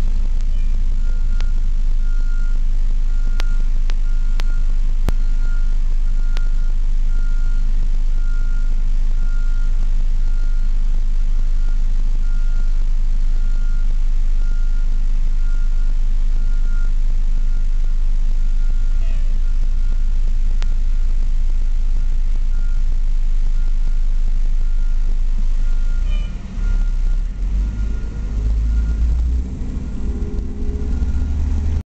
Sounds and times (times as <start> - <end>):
Reversing beeps: 0.6 - 10.8, 11.6 - 21.1, 22.0 - 22.9, 23.6 - 31.8.